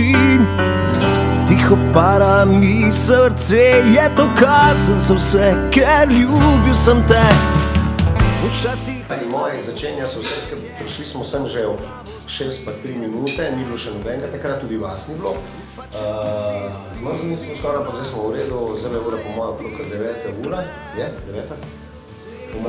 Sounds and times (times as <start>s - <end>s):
Music: 0.0s - 22.6s
Speech: 9.0s - 21.8s, 22.4s - 22.6s.